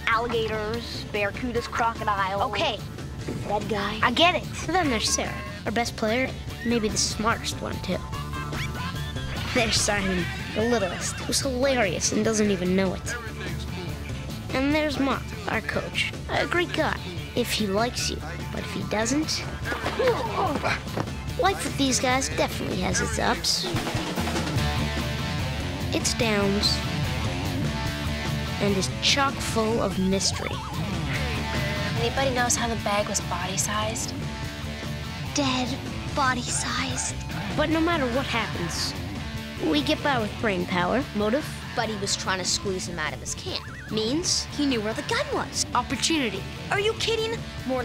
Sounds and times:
Music: 0.0 - 47.8.

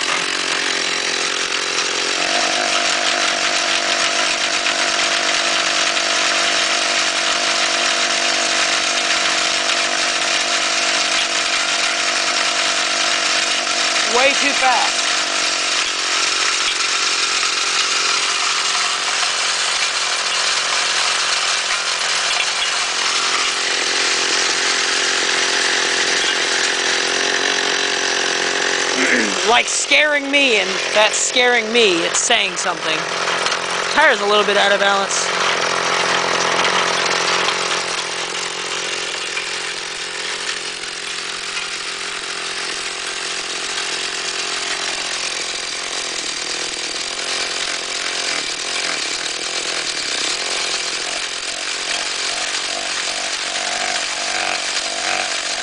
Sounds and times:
Engine: 0.0 - 55.6
Motorcycle: 0.0 - 55.6
Speech: 14.0 - 15.0, 29.0 - 33.0, 33.9 - 35.3.

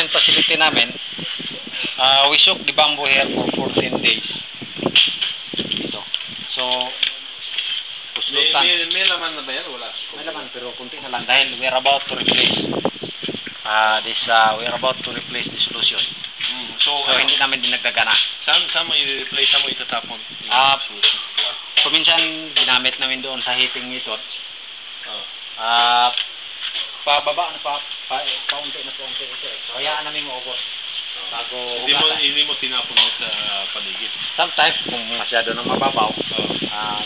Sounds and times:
Speech: 0.0 - 1.0, 2.0 - 4.4, 5.9 - 7.3, 8.2 - 12.6, 13.6 - 24.4, 27.0 - 30.6, 31.2 - 37.0.

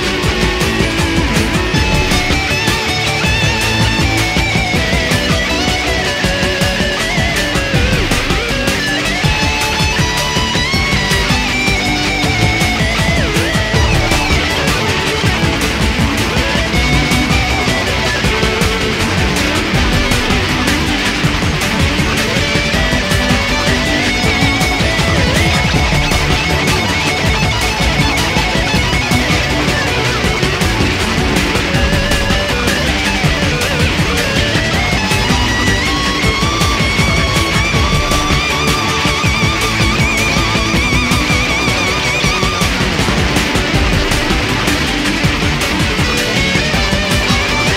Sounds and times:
Music: 0.0 - 47.7.

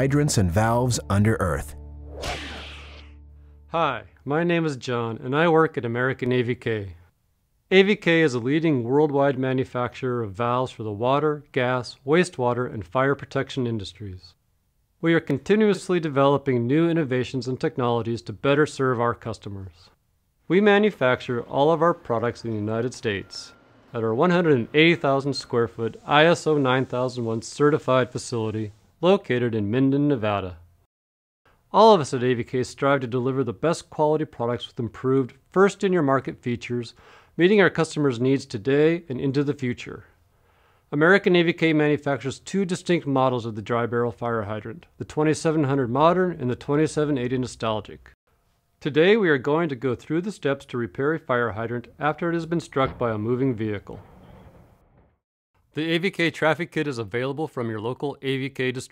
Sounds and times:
Speech: 0.0 - 1.8, 3.7 - 7.0, 7.7 - 14.4, 15.0 - 19.9, 20.5 - 30.6, 31.7 - 40.1, 40.9 - 48.1, 48.8 - 54.0, 55.8 - 58.9.

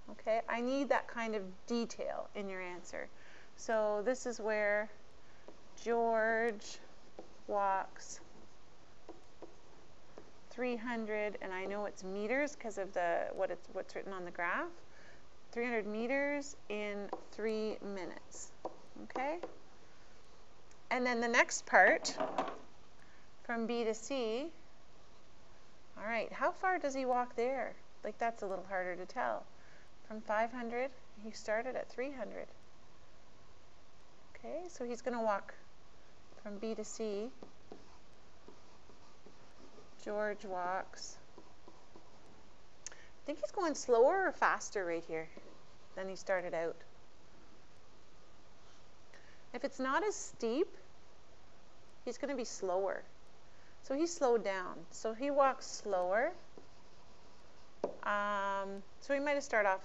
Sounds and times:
Speech: 0.1 - 5.0, 5.8 - 6.8, 7.5 - 8.2, 10.5 - 14.8, 15.6 - 19.5, 20.9 - 22.2, 23.5 - 24.6, 26.0 - 29.5, 30.1 - 32.5, 34.4 - 35.6, 36.4 - 37.4, 40.0 - 41.2, 43.3 - 45.3, 46.0 - 46.8, 49.6 - 50.8, 52.1 - 53.1, 53.9 - 56.4, 58.0 - 59.8.

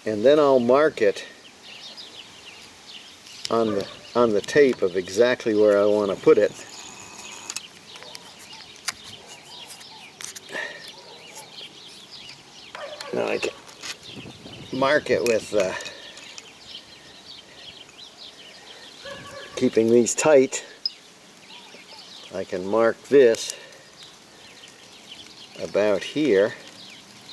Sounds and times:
Speech: 0.0 - 1.4, 3.5 - 6.7, 13.1 - 13.6, 14.7 - 15.9, 19.6 - 20.7, 22.3 - 23.6, 25.6 - 26.6
Outside, rural or natural: 0.0 - 27.3
Bird: 0.1 - 27.3.

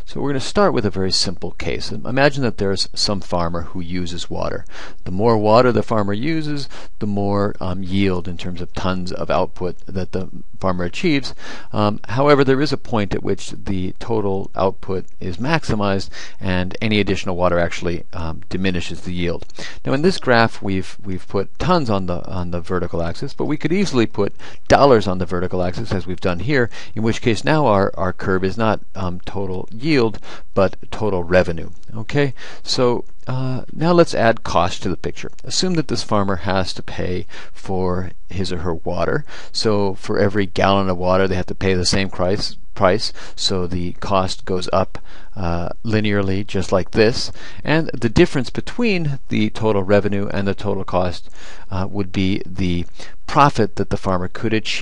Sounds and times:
Speech: 0.0 - 54.8.

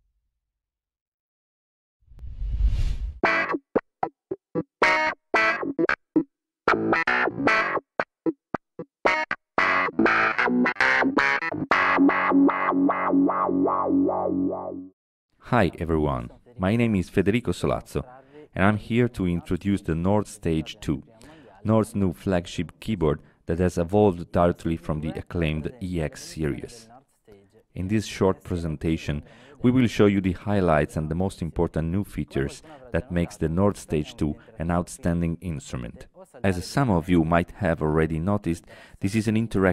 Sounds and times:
Speech: 15.4 - 39.7.

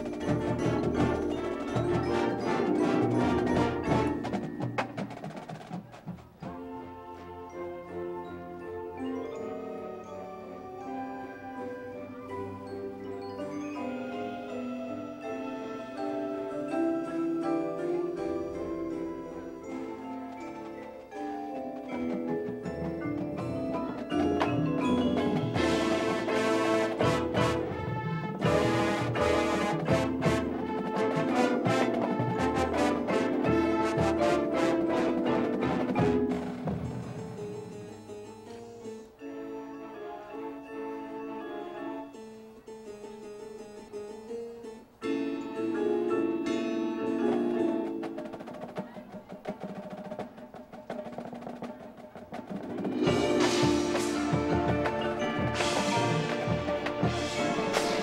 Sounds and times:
Harpsichord: 0.0 - 5.8, 6.5 - 48.9, 52.4 - 58.0.

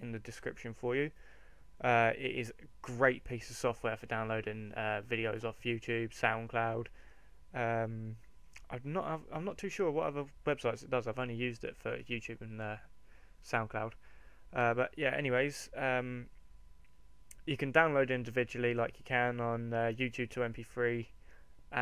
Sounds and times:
Speech: 0.0 - 1.2, 1.8 - 6.9, 7.6 - 14.0, 14.6 - 16.3, 17.3 - 21.1.

